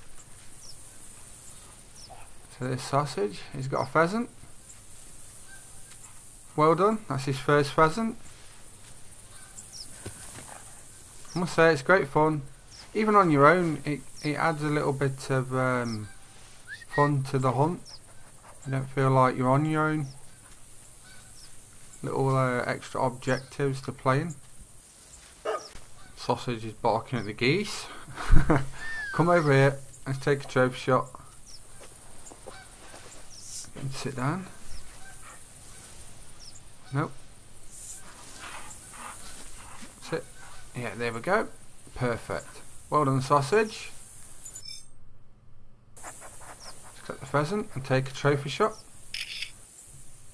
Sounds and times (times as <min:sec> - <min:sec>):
Animal: 0:01.6 - 0:02.5, 0:28.8 - 0:29.8, 0:31.2 - 0:37.1, 0:37.8 - 0:40.8.